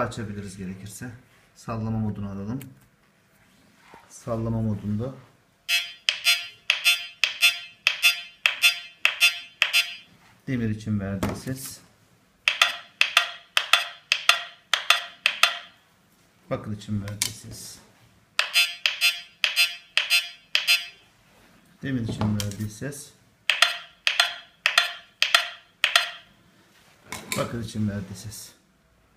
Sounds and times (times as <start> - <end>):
Speech: 0.0 - 2.8, 4.1 - 5.3, 10.5 - 11.9, 16.5 - 17.9, 21.8 - 23.2, 27.3 - 28.7.